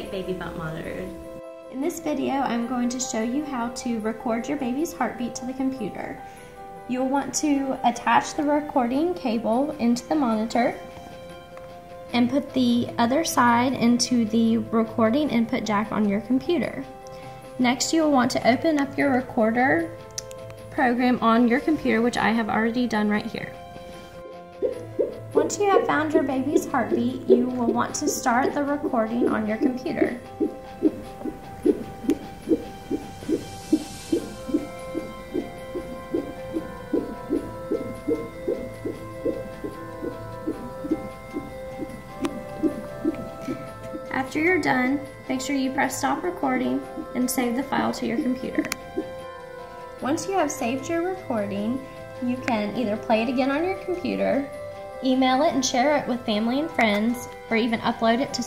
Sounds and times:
Music: 0.0 - 58.4.

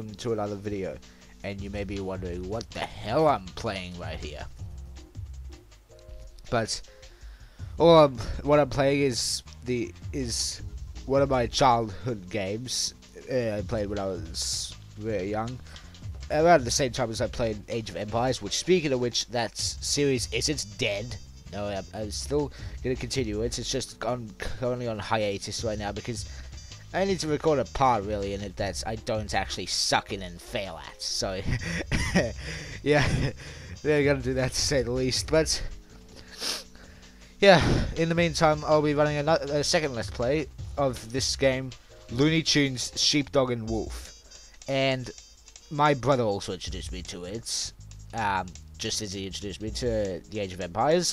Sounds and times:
Speech: 0.0 - 4.5, 6.5 - 6.8, 7.8 - 15.6, 16.3 - 26.2, 27.0 - 31.5, 32.8 - 33.1, 33.8 - 35.7, 37.4 - 44.1, 44.7 - 51.1
Music: 0.0 - 51.1.

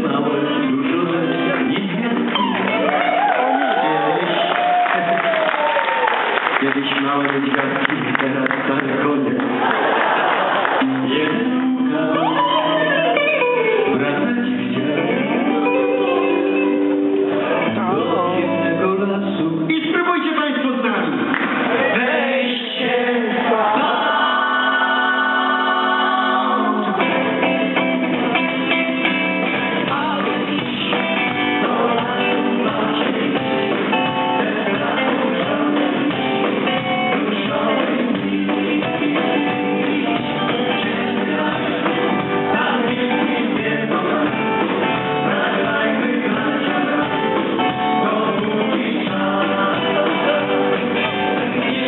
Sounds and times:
Male singing: 0.0 - 2.7, 6.6 - 9.4, 10.8 - 16.4, 17.6 - 20.1, 21.8 - 27.1, 29.8 - 51.8
Pop music: 0.0 - 5.8, 10.8 - 19.4, 21.5 - 51.8.

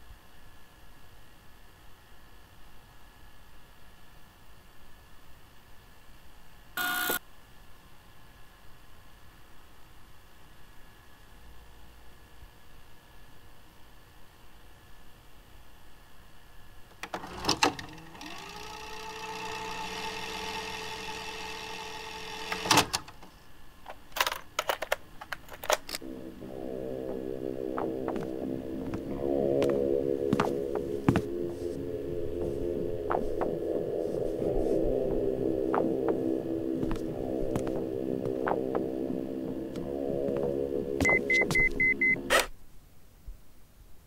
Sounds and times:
Inside, small room: 0.0 - 44.0.

